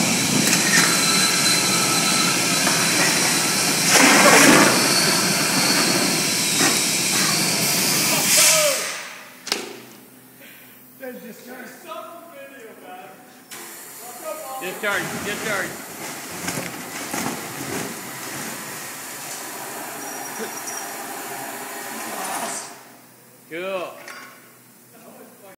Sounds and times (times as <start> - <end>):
Speech: 8.1 - 8.9, 11.0 - 13.3, 14.0 - 15.8, 23.5 - 24.0, 24.9 - 25.5.